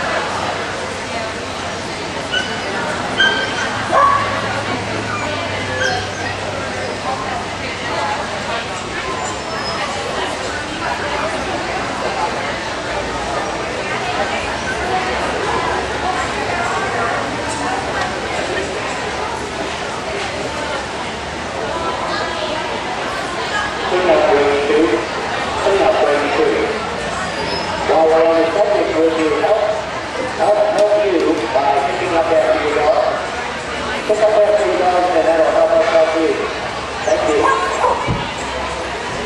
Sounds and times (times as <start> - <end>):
Speech: 0.0 - 39.2.